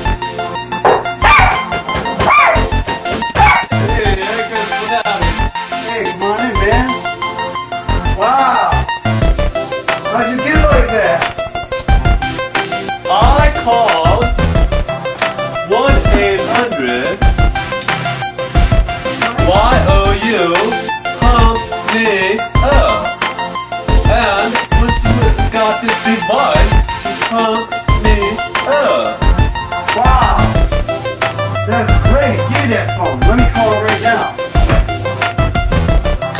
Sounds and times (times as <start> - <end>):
Music: 0.0 - 36.3.